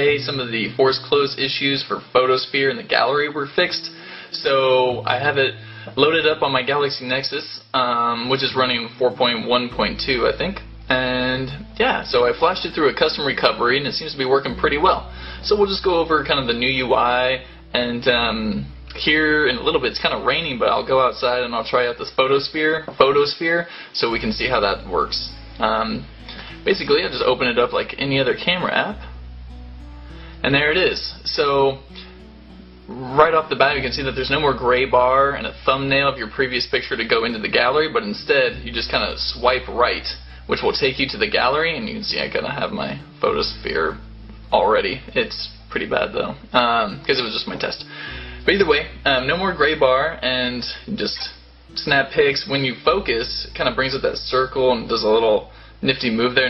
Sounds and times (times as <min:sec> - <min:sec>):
Speech: 0:00.0 - 0:29.1, 0:30.4 - 0:32.1, 0:32.9 - 0:56.5.